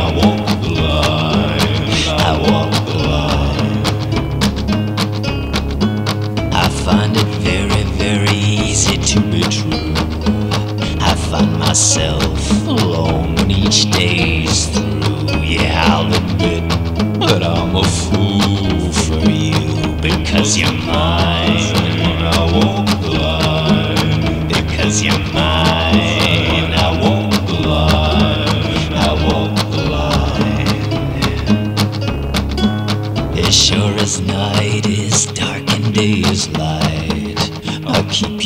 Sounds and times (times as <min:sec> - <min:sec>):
Music: 0:00.0 - 0:38.4.